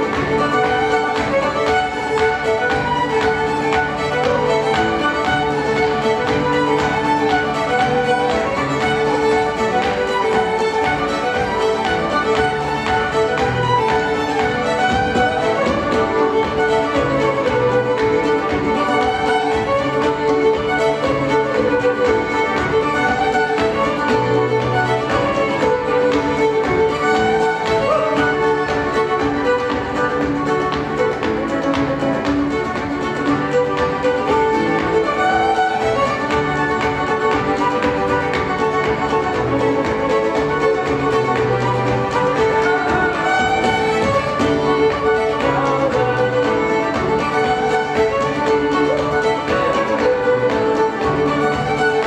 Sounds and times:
Violin, fiddle: 0.0 - 52.0.

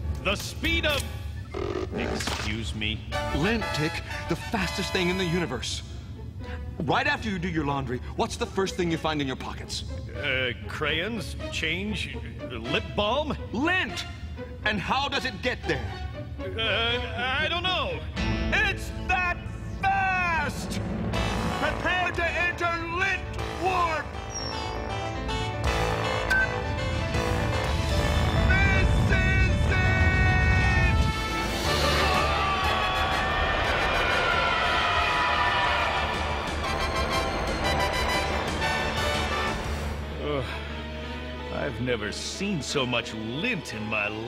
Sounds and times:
Music: 0.0 - 44.2
Speech: 21.6 - 24.1, 41.5 - 44.2.

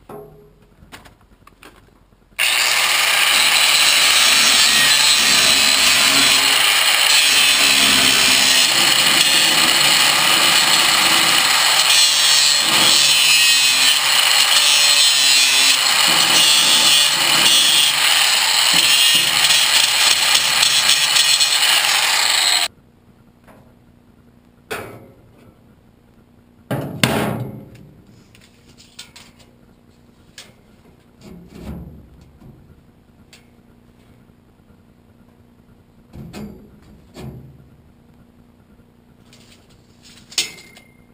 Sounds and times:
Power tool: 2.4 - 22.7.

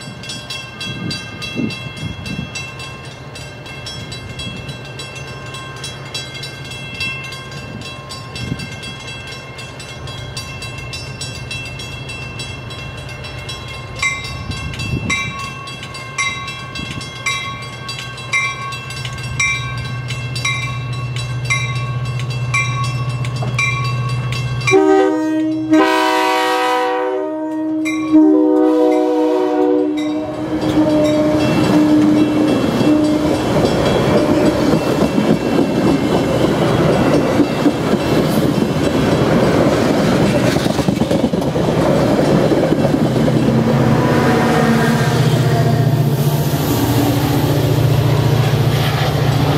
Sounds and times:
Railroad car, train wagon: 0.0 - 49.5
Train: 0.0 - 49.5.

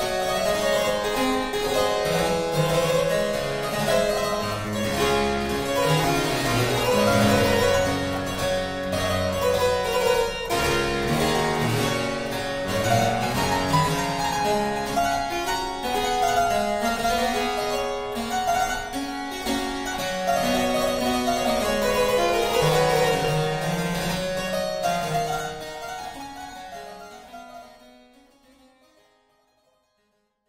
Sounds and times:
Harpsichord: 0.0 - 29.6.

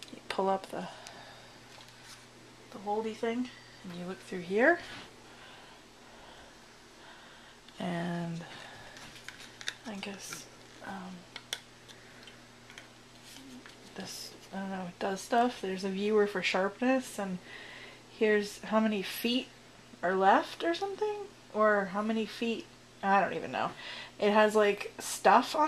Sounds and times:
Speech: 0.1 - 1.0, 2.8 - 5.0, 7.8 - 8.6, 9.8 - 11.2, 14.0 - 17.4, 18.2 - 25.6.

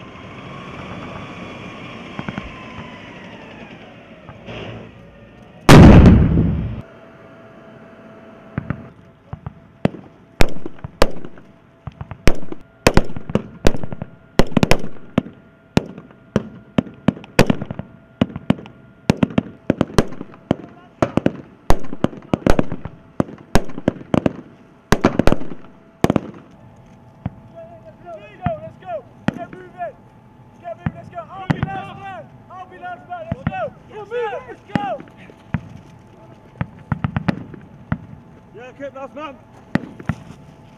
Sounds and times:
Outside, rural or natural: 0.0 - 40.7.

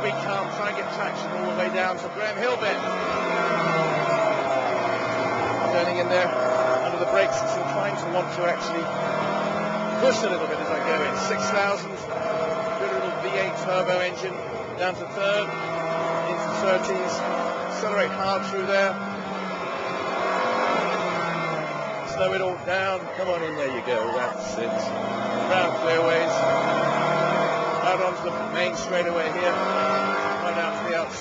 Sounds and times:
Speech: 0.0 - 2.8, 5.7 - 8.9, 10.0 - 12.0, 12.8 - 15.5, 16.3 - 19.0, 22.1 - 24.9, 25.5 - 26.4, 27.8 - 29.7, 30.4 - 31.2.

